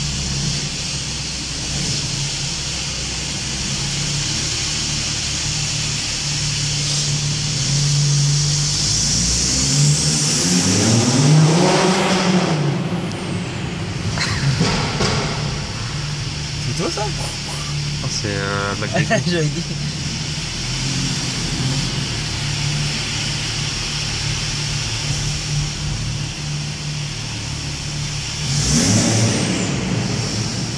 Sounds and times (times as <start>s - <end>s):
Speech: 16.7s - 19.7s.